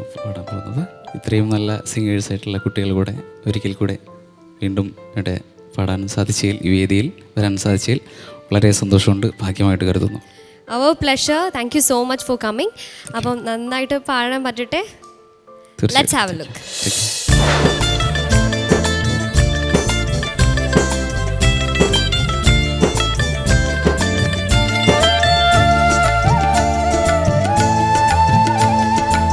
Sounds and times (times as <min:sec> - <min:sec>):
Music: 0:00.0 - 0:29.3
Speech: 0:00.3 - 0:04.0, 0:04.6 - 0:15.0, 0:15.8 - 0:16.6.